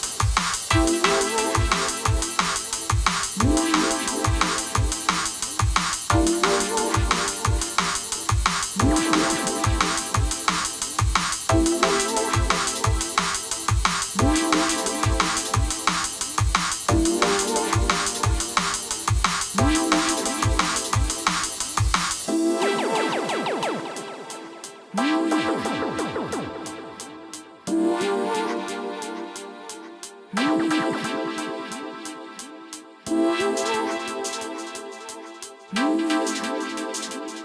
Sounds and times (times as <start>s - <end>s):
Music: 0.0s - 37.4s.